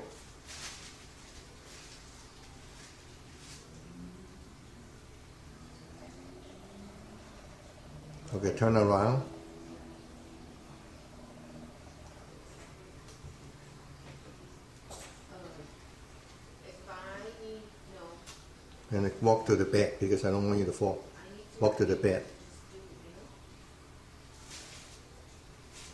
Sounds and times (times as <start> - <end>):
Male speech, man speaking: 8.2 - 9.5, 18.9 - 22.4
Female speech, woman speaking: 15.3 - 15.7, 16.6 - 18.3, 21.1 - 21.7, 22.5 - 23.4
Conversation: 16.6 - 23.3.